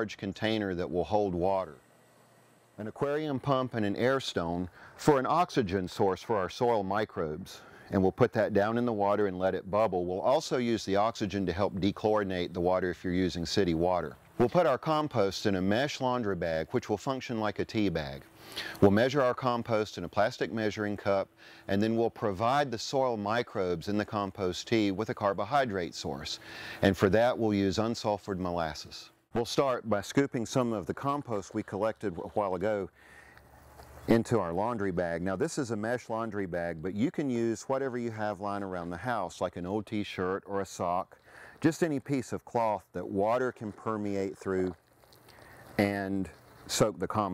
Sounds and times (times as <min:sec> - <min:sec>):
Speech: 0:00.0 - 0:01.8, 0:02.8 - 0:33.0, 0:34.1 - 0:44.8, 0:45.8 - 0:47.3.